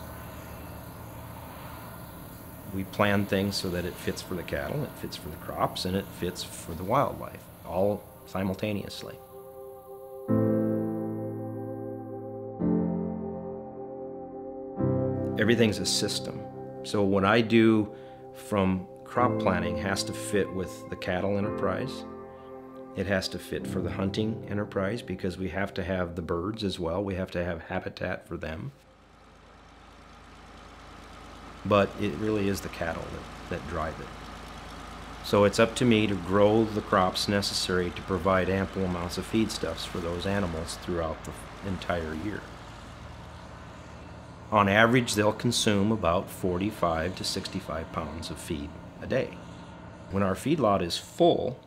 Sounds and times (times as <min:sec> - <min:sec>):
Speech: 0:02.7 - 0:09.2, 0:15.4 - 0:22.1, 0:23.0 - 0:28.8, 0:31.6 - 0:34.1, 0:35.2 - 0:42.5, 0:44.5 - 0:49.4, 0:50.1 - 0:51.6
Music: 0:07.9 - 0:26.8.